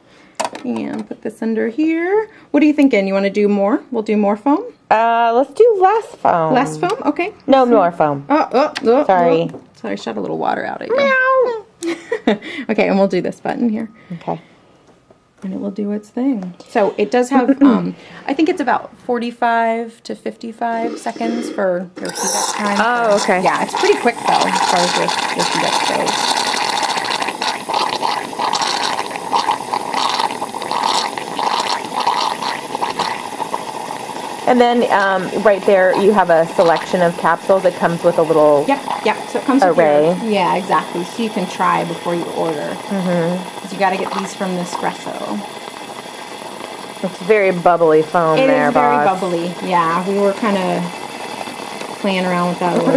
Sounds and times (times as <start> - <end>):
Inside, small room: 0.0 - 52.9.